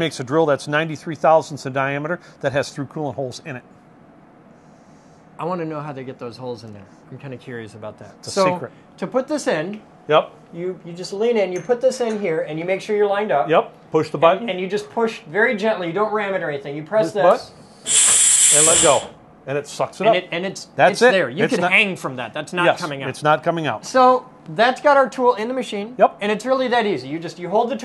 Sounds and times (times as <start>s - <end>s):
Speech: 0.0s - 3.6s, 5.4s - 17.6s, 18.6s - 27.8s.